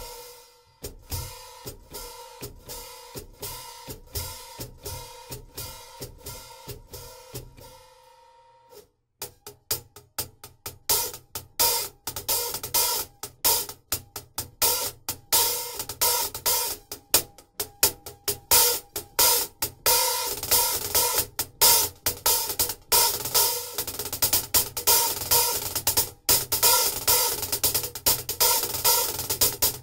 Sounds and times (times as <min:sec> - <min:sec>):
Music: 0:00.0 - 0:29.8.